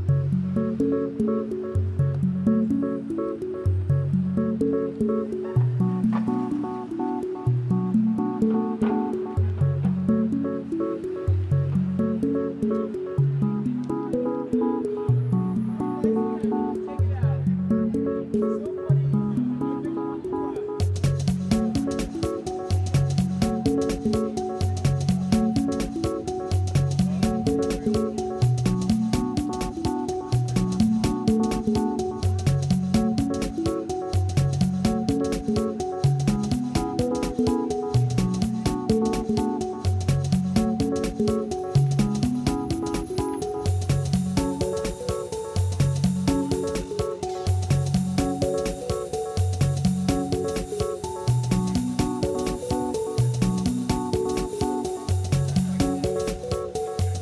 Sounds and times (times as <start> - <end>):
Music: 0.0 - 57.2.